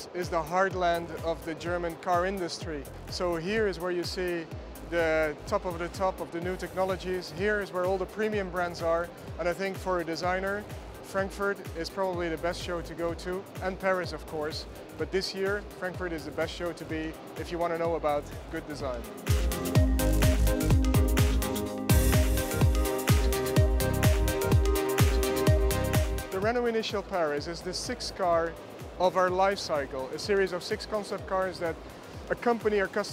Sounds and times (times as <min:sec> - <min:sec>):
Speech: 0:00.0 - 0:19.0, 0:26.3 - 0:33.1
Music: 0:00.0 - 0:33.1.